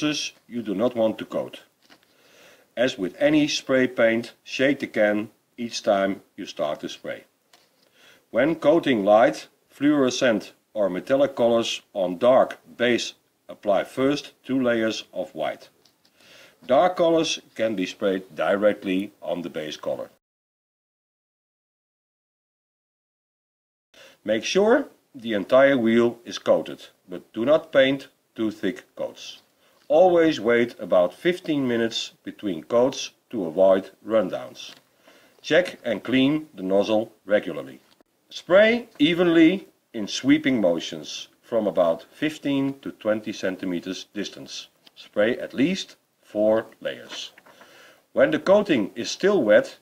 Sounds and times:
Speech: 0.0 - 1.7, 2.8 - 7.3, 8.3 - 15.8, 16.7 - 20.2, 24.2 - 34.8, 35.4 - 47.4, 48.2 - 49.8.

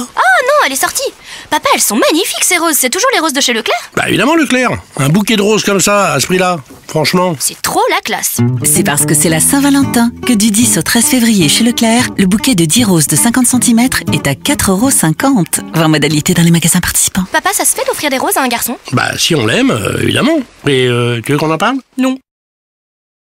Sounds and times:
Speech: 0.0 - 22.3
Music: 8.4 - 16.8.

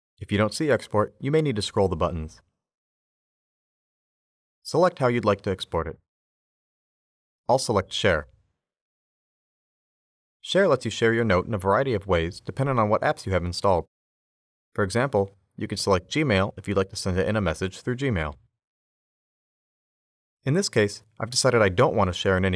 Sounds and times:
Speech: 0.2 - 2.4, 4.7 - 6.0, 7.5 - 8.3, 10.4 - 13.9, 14.8 - 18.4, 20.5 - 22.5.

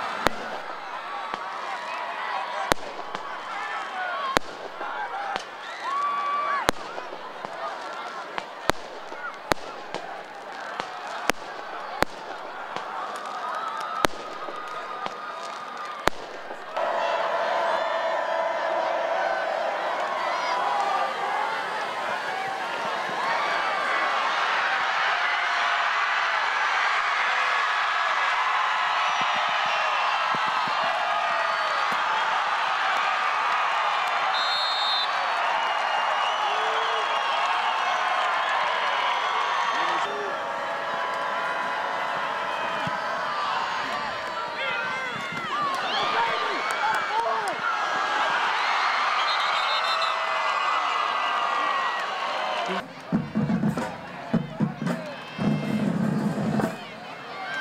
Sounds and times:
Fireworks: 0.0 - 1.6, 2.6 - 16.9.

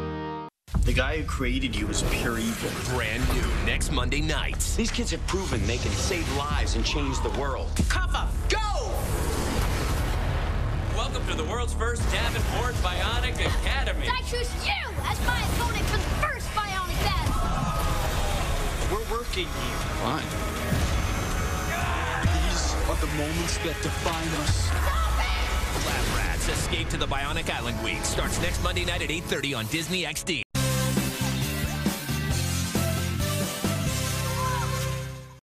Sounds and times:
Music: 0.0 - 1.1, 6.5 - 35.4
Speech: 0.8 - 8.9, 22.3 - 24.8, 25.9 - 30.4.

